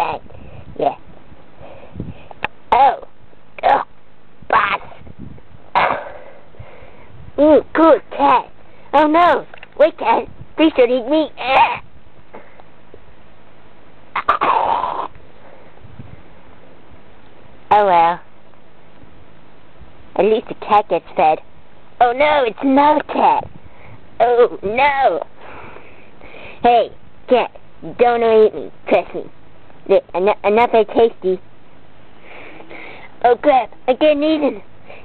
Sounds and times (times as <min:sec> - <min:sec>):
Speech: 0:00.0 - 0:00.2, 0:00.8 - 0:01.0, 0:02.7 - 0:03.9, 0:04.5 - 0:04.9, 0:07.4 - 0:11.8, 0:17.7 - 0:18.3, 0:20.2 - 0:21.4, 0:22.0 - 0:23.5, 0:24.2 - 0:25.3, 0:26.6 - 0:29.3, 0:29.9 - 0:31.4, 0:33.2 - 0:34.6.